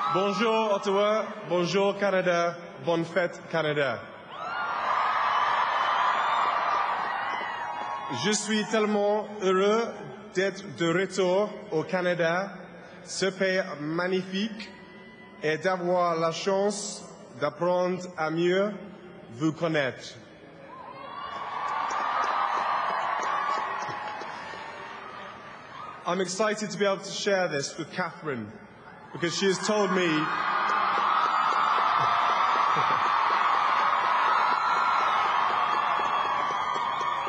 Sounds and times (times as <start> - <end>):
Narration, monologue: 0.0 - 4.2, 8.1 - 20.3, 26.0 - 30.4
Male speech, man speaking: 0.1 - 4.0, 8.1 - 14.7, 15.4 - 20.2, 26.0 - 28.6, 29.2 - 30.4.